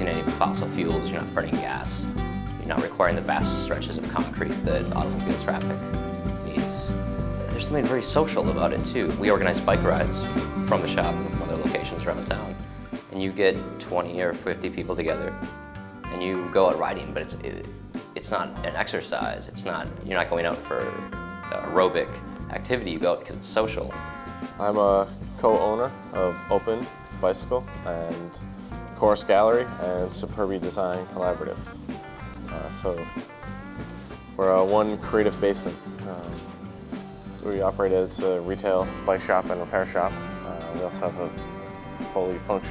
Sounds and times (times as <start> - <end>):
Speech: 0.0 - 5.8, 6.4 - 7.0, 7.6 - 15.4, 16.1 - 24.0, 24.6 - 28.4, 29.0 - 31.6, 32.5 - 33.1, 34.4 - 36.4, 37.4 - 42.7
Music: 0.0 - 42.7.